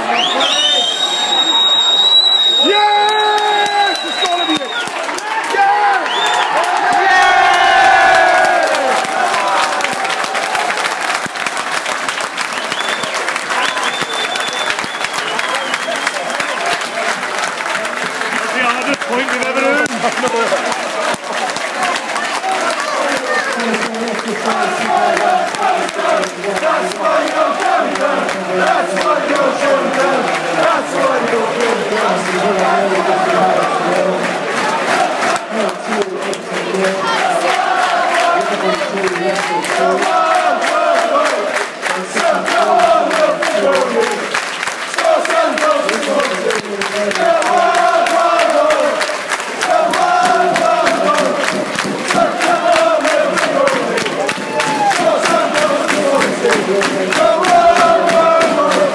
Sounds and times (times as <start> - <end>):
Speech: 17.8 - 25.1, 35.4 - 40.3.